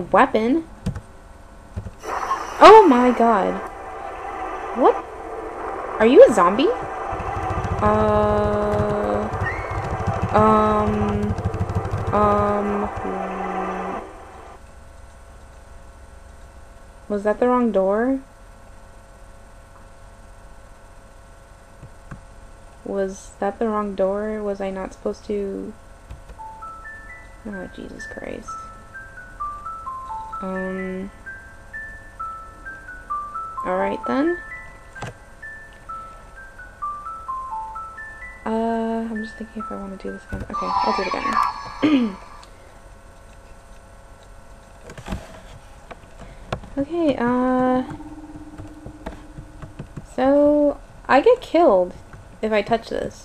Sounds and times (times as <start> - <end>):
Speech: 0.0 - 0.7, 2.6 - 3.6, 4.8 - 5.0, 6.0 - 6.8, 7.8 - 9.3, 10.4 - 11.4, 12.1 - 13.3, 17.1 - 18.3, 22.9 - 25.8, 27.5 - 28.6, 30.4 - 31.1, 33.6 - 34.4, 38.5 - 42.2, 46.8 - 48.0, 50.1 - 53.2.